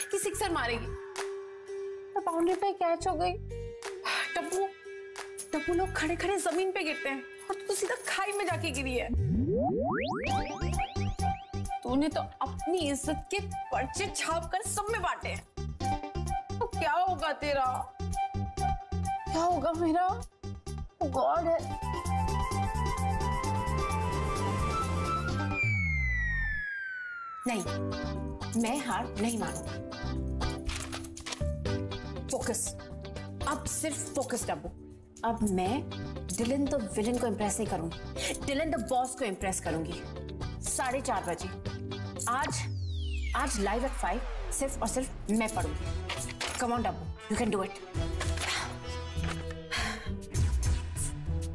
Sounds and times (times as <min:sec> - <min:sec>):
Music: 0:00.0 - 0:26.7, 0:27.4 - 0:51.5.